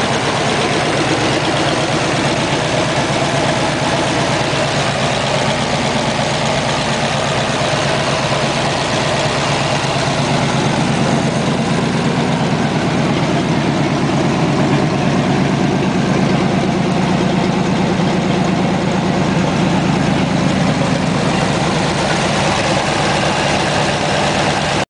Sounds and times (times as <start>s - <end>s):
Car: 0.0s - 24.8s.